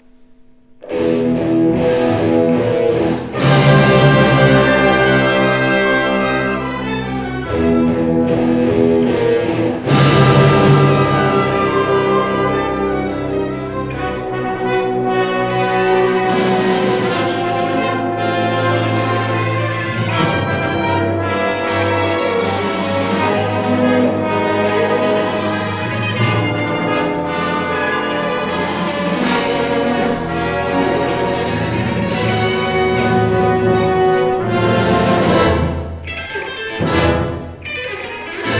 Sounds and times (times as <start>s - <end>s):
Orchestra: 0.0s - 38.5s.